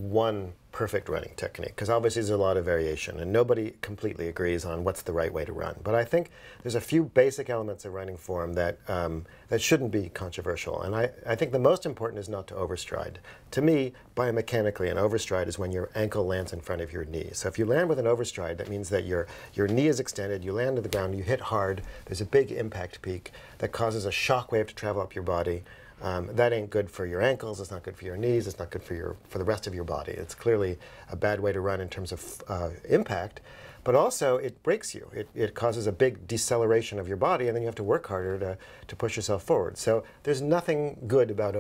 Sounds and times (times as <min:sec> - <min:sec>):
Inside, small room: 0:00.0 - 0:41.6
Speech: 0:00.0 - 0:41.6.